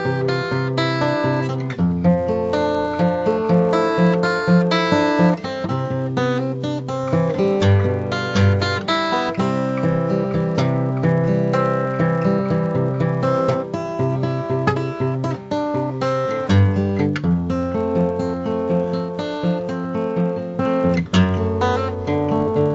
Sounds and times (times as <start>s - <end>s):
Acoustic guitar: 0.0s - 22.7s
Strum: 0.0s - 22.7s.